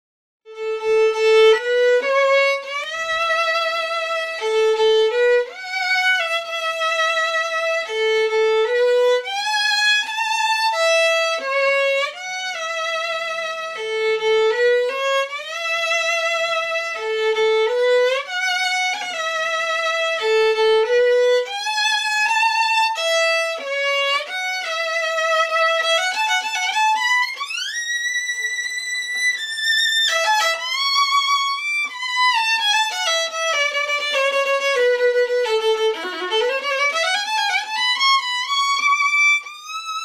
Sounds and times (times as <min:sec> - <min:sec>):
Violin, fiddle: 0:00.5 - 0:40.0.